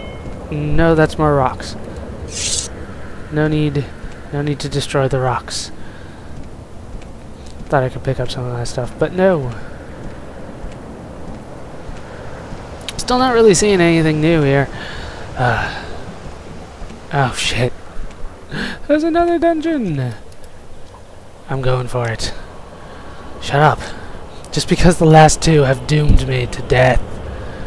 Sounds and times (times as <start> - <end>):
Speech: 0.5 - 1.8, 3.3 - 5.8, 7.7 - 9.6, 12.9 - 14.7, 17.1 - 17.7, 18.8 - 20.2, 21.5 - 22.4, 23.4 - 27.0.